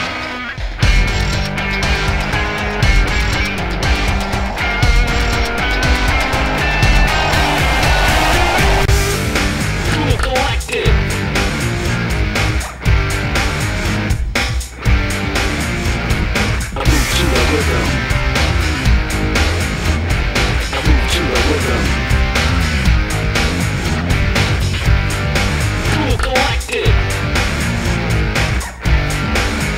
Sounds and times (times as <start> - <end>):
Music: 0.0 - 29.7.